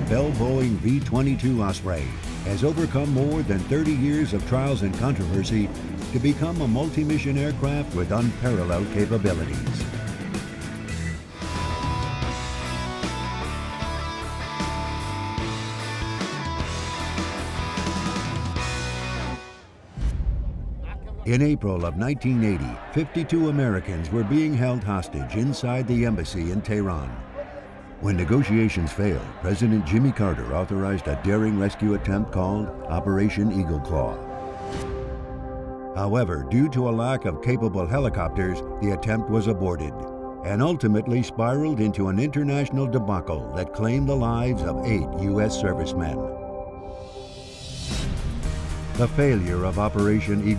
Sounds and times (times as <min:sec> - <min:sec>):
Speech: 0:00.0 - 0:09.8, 0:20.9 - 0:27.2, 0:28.0 - 0:34.2, 0:36.0 - 0:46.3, 0:49.0 - 0:50.5
Music: 0:00.0 - 0:50.5.